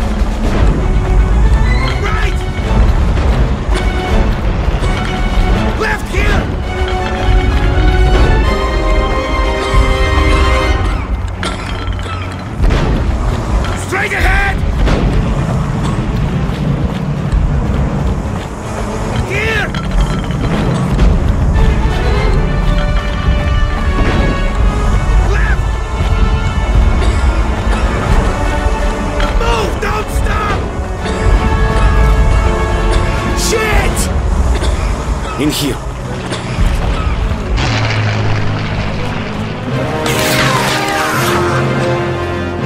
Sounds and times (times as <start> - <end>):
Music: 0.0 - 42.6.